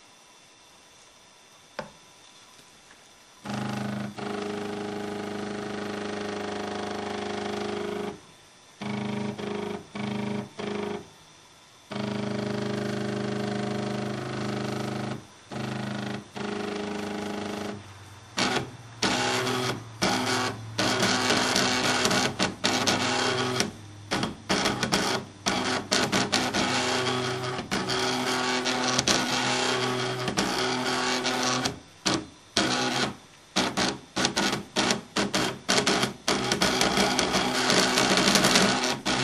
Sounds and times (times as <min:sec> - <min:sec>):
Printer: 0:03.4 - 0:11.2, 0:11.9 - 0:39.2.